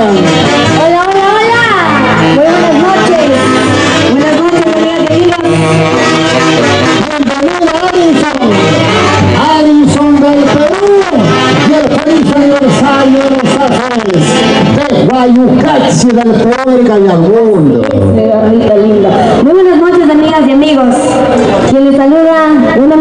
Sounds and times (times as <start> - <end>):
Music: 0.0 - 23.0.